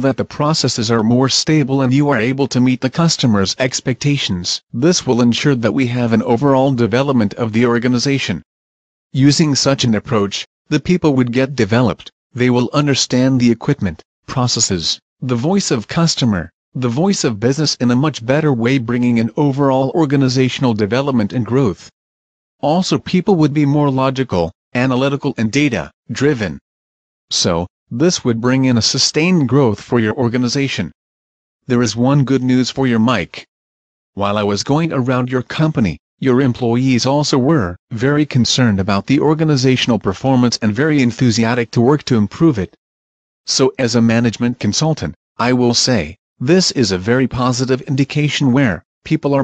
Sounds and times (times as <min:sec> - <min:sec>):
Speech synthesizer: 0:00.0 - 0:08.5, 0:09.2 - 0:21.9, 0:22.6 - 0:26.6, 0:27.3 - 0:31.0, 0:31.7 - 0:33.5, 0:34.2 - 0:42.8, 0:43.5 - 0:49.4.